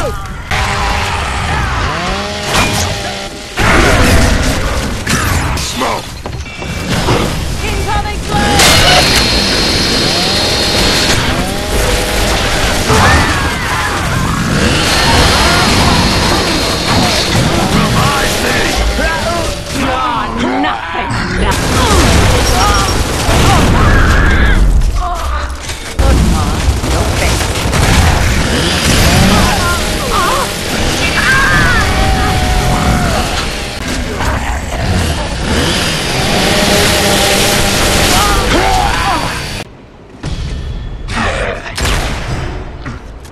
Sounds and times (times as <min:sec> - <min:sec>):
Fusillade: 0:08.2 - 0:20.1, 0:21.5 - 0:24.7, 0:26.0 - 0:34.0, 0:34.8 - 0:38.7.